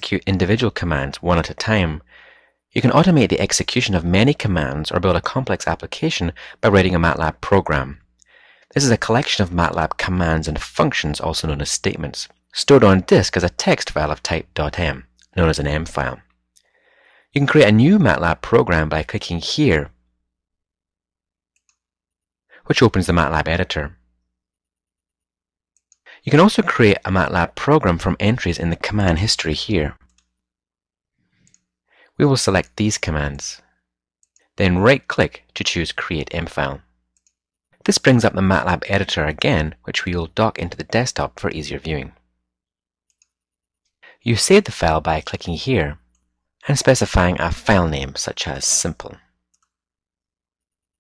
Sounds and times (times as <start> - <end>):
Speech: 0.0 - 2.1, 2.8 - 8.1, 8.7 - 16.3, 17.4 - 20.0, 22.6 - 24.0, 26.2 - 30.1, 32.2 - 33.7, 34.6 - 36.9, 37.8 - 42.2, 44.2 - 46.0, 46.6 - 49.3.